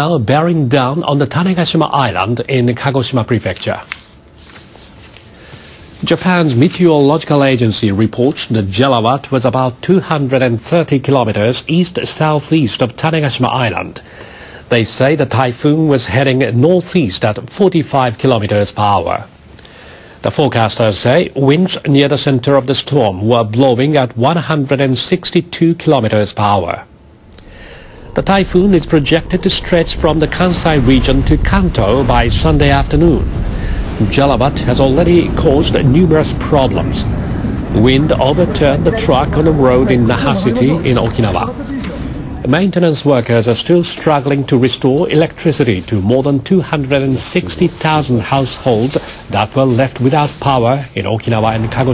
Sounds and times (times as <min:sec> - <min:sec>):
Speech: 0:00.0 - 0:04.0, 0:06.0 - 0:14.0, 0:14.7 - 0:19.3, 0:20.2 - 0:26.9, 0:28.2 - 0:33.3, 0:34.0 - 0:37.1, 0:37.8 - 0:51.9.